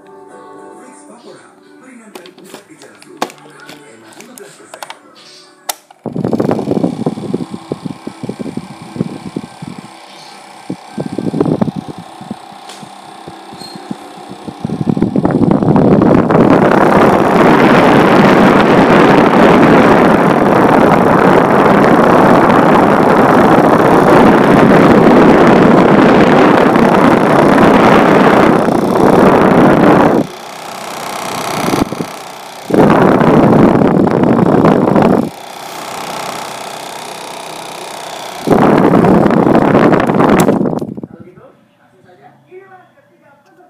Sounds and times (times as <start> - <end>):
Wind noise (microphone): 6.0 - 35.4, 38.4 - 41.3.